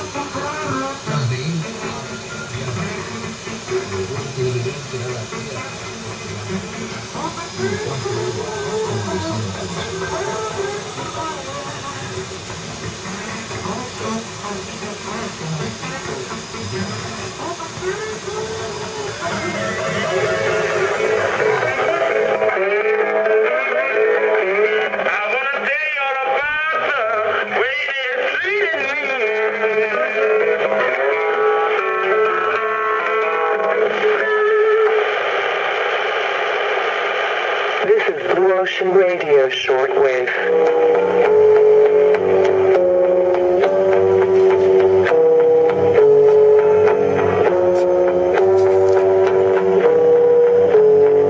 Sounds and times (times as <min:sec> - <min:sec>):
Radio: 0:00.0 - 0:12.2, 0:12.9 - 0:41.3
Music: 0:00.0 - 0:51.2.